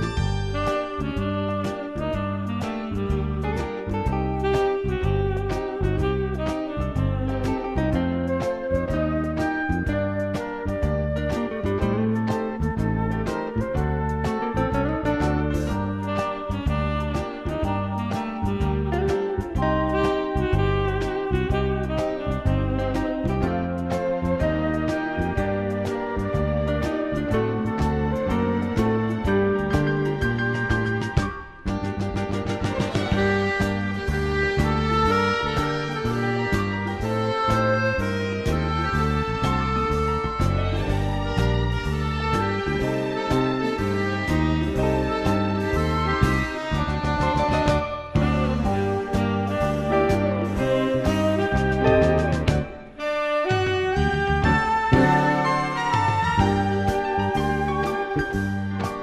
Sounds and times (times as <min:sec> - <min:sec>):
Sad music: 0:00.0 - 0:32.0, 0:32.6 - 0:59.0.